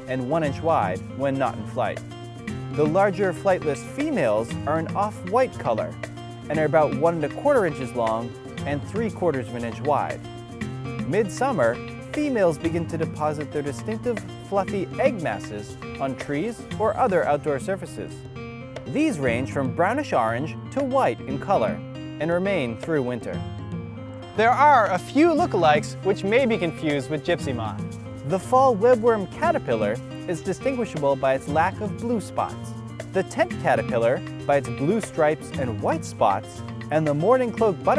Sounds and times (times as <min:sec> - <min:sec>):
Speech: 0:00.0 - 0:02.0, 0:02.8 - 0:10.2, 0:11.1 - 0:18.2, 0:18.9 - 0:23.4, 0:24.4 - 0:37.9
Music: 0:00.0 - 0:37.9.